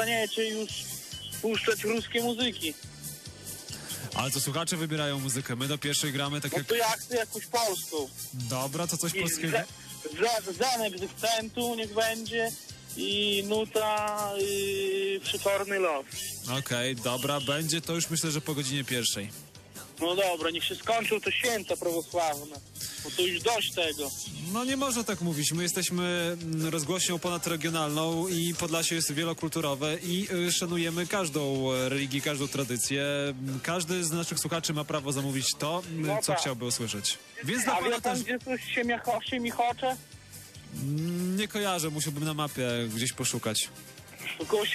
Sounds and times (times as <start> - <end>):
Radio: 0.0 - 2.8, 13.0 - 17.7, 20.1 - 24.5, 37.3 - 39.9, 44.1 - 44.7
Speech: 0.0 - 2.8, 4.2 - 19.3, 20.0 - 40.0, 40.8 - 44.7
Music: 0.0 - 44.7.